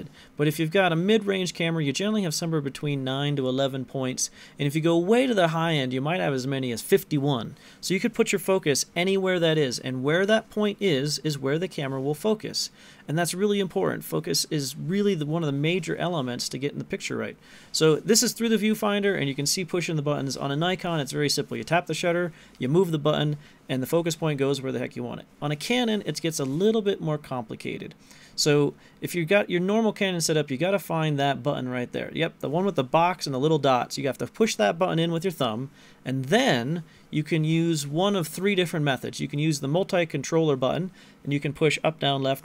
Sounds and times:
Speech: 0.0s - 42.4s.

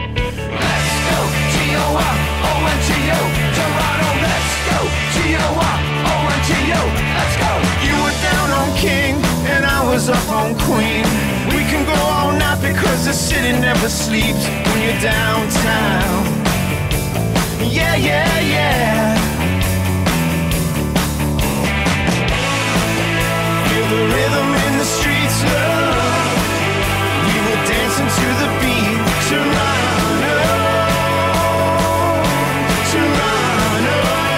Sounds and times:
Music: 0.0s - 34.3s.

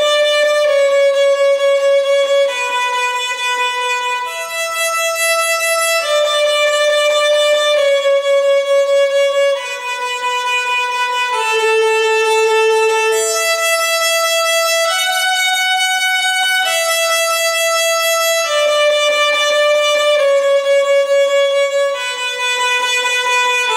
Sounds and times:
Violin, fiddle: 0.0s - 23.7s.

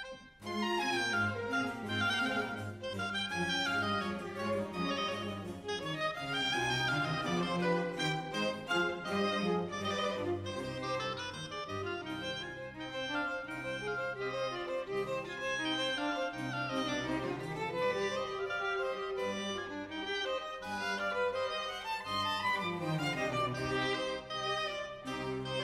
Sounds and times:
Violin, fiddle: 0.0s - 25.6s.

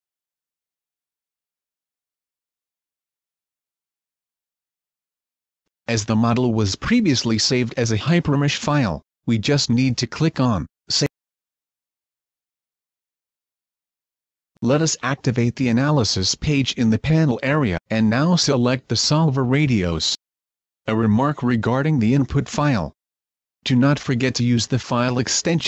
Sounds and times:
Speech: 5.9s - 11.2s, 14.6s - 20.2s, 20.9s - 23.0s, 23.6s - 25.6s.

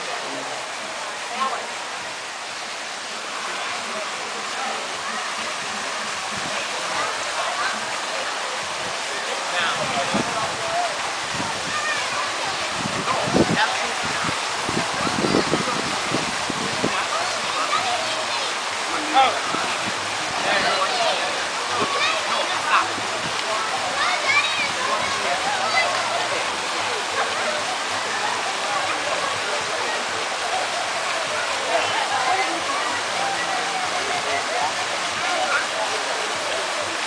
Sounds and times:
Stream: 0.0s - 37.0s
Waterfall: 0.0s - 37.0s
Speech: 3.5s - 37.0s.

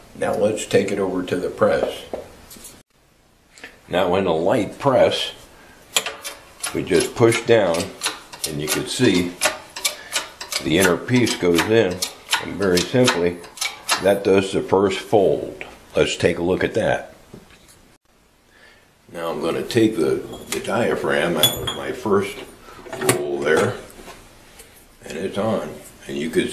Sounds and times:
Speech: 0.2s - 2.2s, 3.9s - 5.4s, 6.7s - 9.4s, 10.6s - 17.2s, 19.1s - 24.0s, 25.0s - 26.5s.

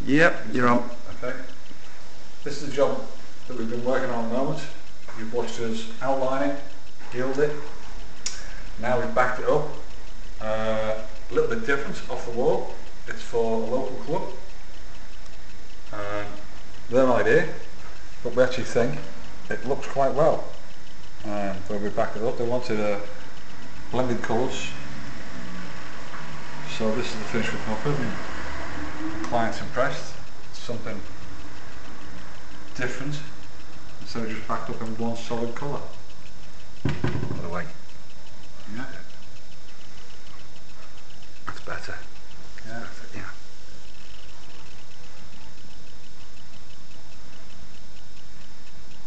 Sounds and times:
Speech: 0.0s - 1.5s, 2.4s - 7.7s, 8.8s - 9.8s, 10.4s - 14.4s, 15.9s - 17.6s, 18.2s - 20.6s, 21.2s - 23.2s, 23.9s - 24.8s, 26.7s - 28.2s, 29.3s - 31.1s, 32.8s - 33.4s, 34.0s - 36.0s, 37.3s - 37.8s, 38.7s - 39.1s, 41.5s - 43.4s.

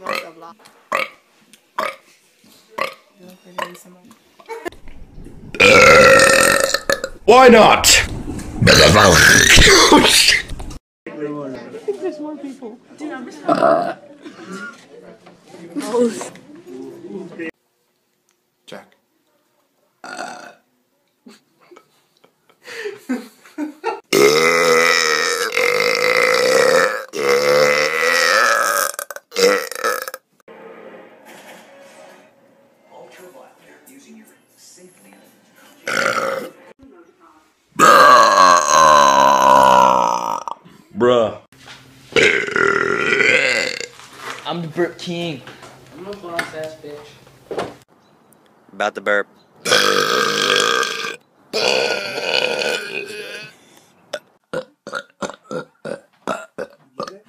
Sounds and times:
Burping, eructation: 0.9s - 1.2s, 1.8s - 2.0s, 2.8s - 3.8s, 5.5s - 7.2s, 8.6s - 10.5s, 13.5s - 14.0s, 20.0s - 20.6s, 24.1s - 30.3s, 35.9s - 36.6s, 37.8s - 40.6s, 42.2s - 43.9s, 49.6s - 57.2s.

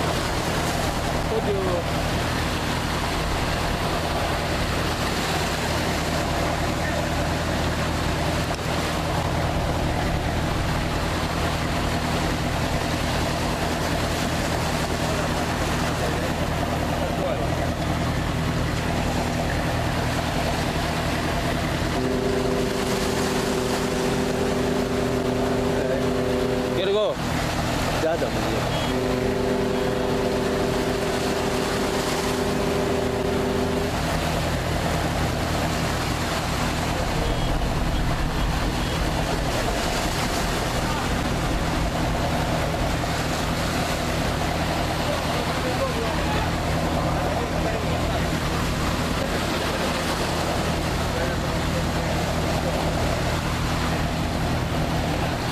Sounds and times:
Speech: 1.2s - 2.0s, 16.0s - 17.8s, 25.7s - 27.2s, 27.9s - 29.2s, 44.9s - 48.6s.

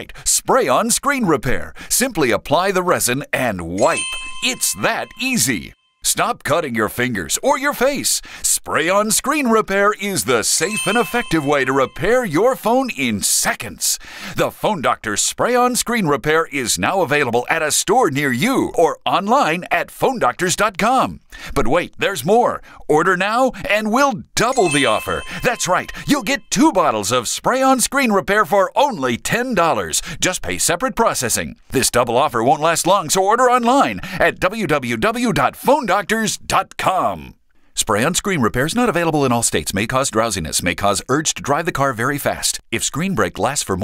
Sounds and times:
Speech: 0.0s - 43.8s.

